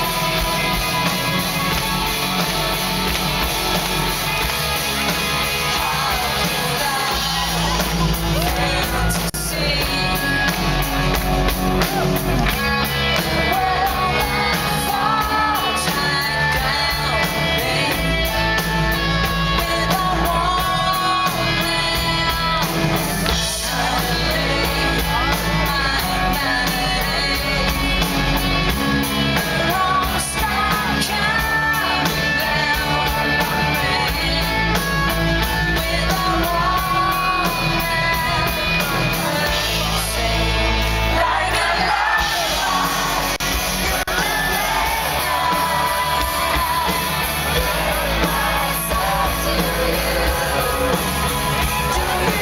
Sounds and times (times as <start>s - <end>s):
Music: 0.0s - 52.4s.